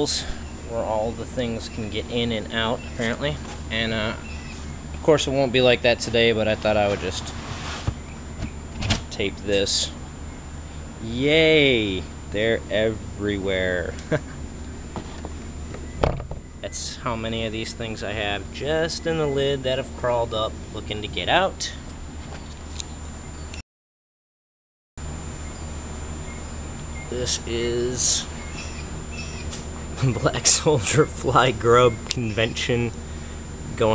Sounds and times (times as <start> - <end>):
Speech: 0.0 - 4.3, 5.0 - 7.4, 9.1 - 10.0, 11.0 - 14.0, 16.6 - 21.8, 27.1 - 28.3, 30.0 - 33.0, 33.7 - 33.9.